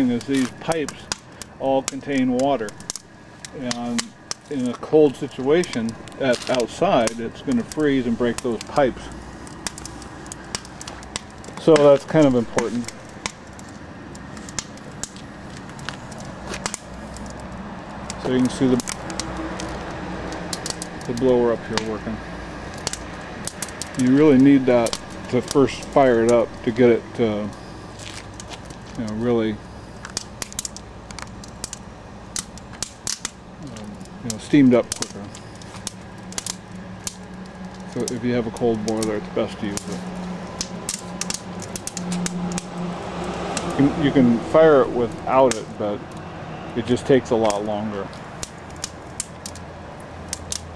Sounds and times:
Speech: 0.0s - 2.8s, 3.5s - 9.2s, 11.6s - 12.9s, 18.2s - 18.9s, 21.1s - 22.2s, 24.0s - 27.6s, 28.9s - 29.6s, 33.6s - 35.3s, 37.9s - 40.0s, 43.8s - 46.0s, 46.8s - 48.1s
Vehicle: 0.0s - 50.7s.

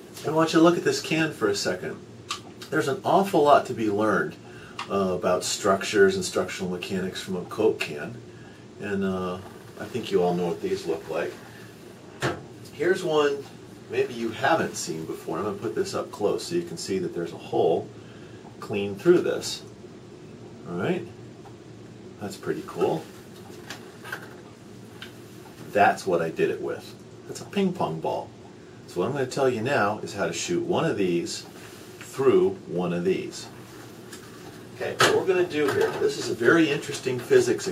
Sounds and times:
Speech: 0.0s - 8.2s, 8.8s - 11.5s, 12.7s - 17.9s, 18.6s - 19.7s, 20.6s - 21.2s, 22.2s - 23.1s, 25.6s - 28.3s, 28.9s - 33.6s, 34.8s - 37.7s.

